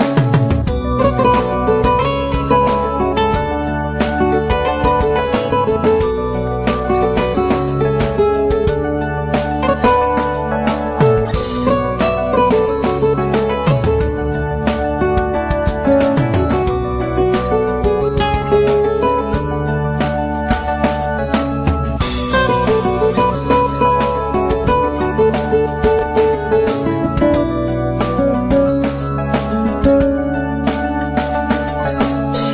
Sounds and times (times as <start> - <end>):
Music: 0.0 - 32.5.